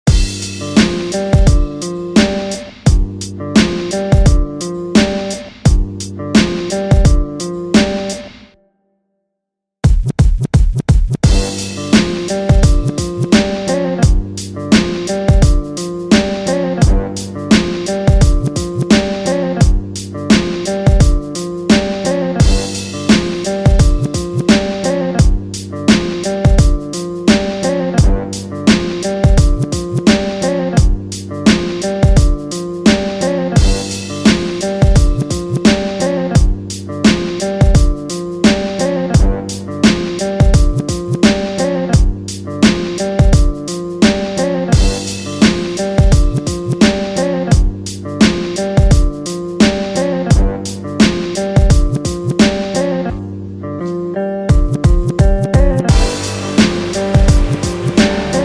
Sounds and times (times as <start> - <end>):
Music: 0.0 - 58.4.